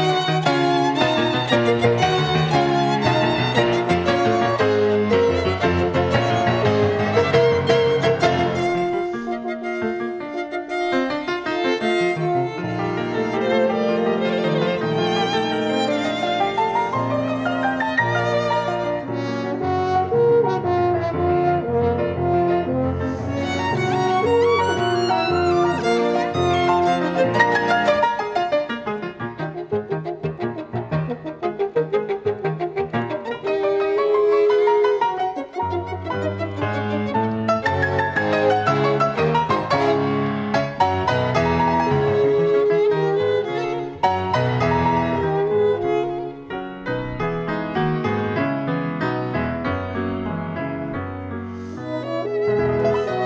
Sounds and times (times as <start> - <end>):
Violin, fiddle: 0.0 - 21.5, 22.3 - 47.9, 51.6 - 53.2.